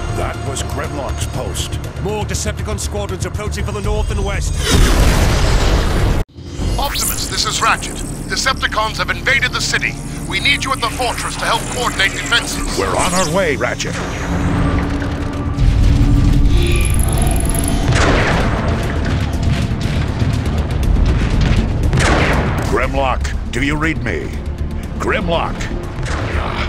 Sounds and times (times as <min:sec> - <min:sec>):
Music: 0:00.0 - 0:26.6
Speech: 0:00.2 - 0:04.6, 0:06.8 - 0:14.0, 0:22.7 - 0:24.4, 0:25.0 - 0:25.7.